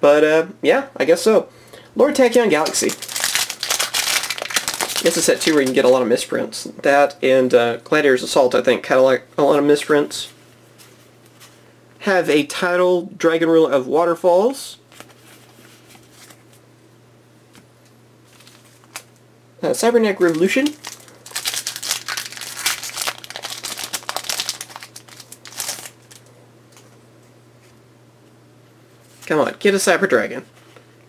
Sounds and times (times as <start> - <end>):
Speech: 0.0 - 3.0, 5.0 - 10.4, 12.0 - 14.8, 19.6 - 20.8, 29.2 - 30.5
Inside, small room: 0.0 - 31.0.